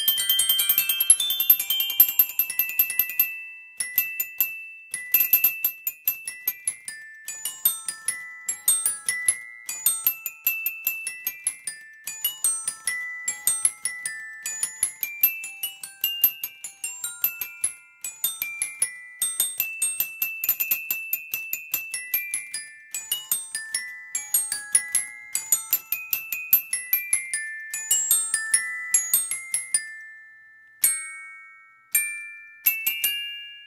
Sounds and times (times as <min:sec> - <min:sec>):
Glockenspiel: 0:00.0 - 0:33.6
Marimba, xylophone: 0:00.0 - 0:33.6.